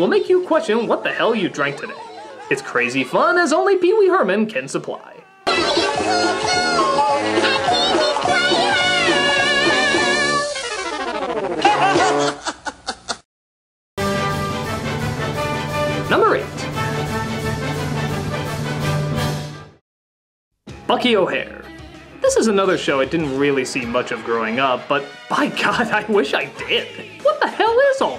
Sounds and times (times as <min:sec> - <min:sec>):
Speech: 0:00.0 - 0:05.3, 0:16.1 - 0:16.6, 0:20.9 - 0:28.1
Music: 0:05.5 - 0:11.4, 0:14.0 - 0:19.8, 0:20.7 - 0:28.1.